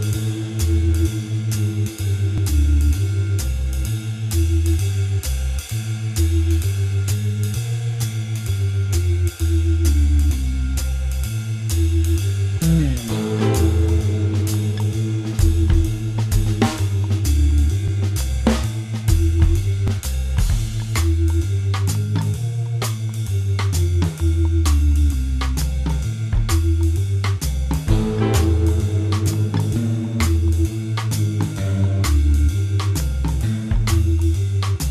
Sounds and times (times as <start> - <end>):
Music: 0.0 - 34.9.